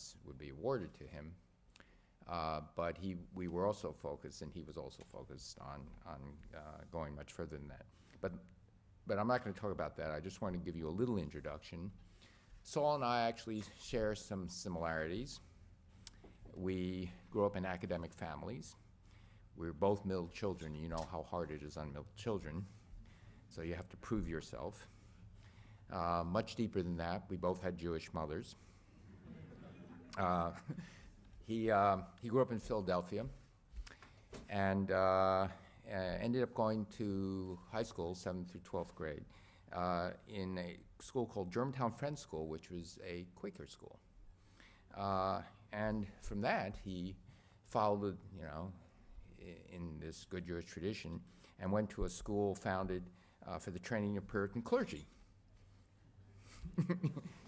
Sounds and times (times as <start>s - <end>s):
Speech: 0.0s - 1.4s, 2.2s - 12.0s, 12.6s - 15.5s, 16.5s - 18.8s, 19.6s - 22.8s, 23.5s - 25.0s, 25.9s - 28.6s, 30.0s - 30.8s, 31.4s - 33.5s, 34.4s - 44.1s, 44.9s - 55.2s.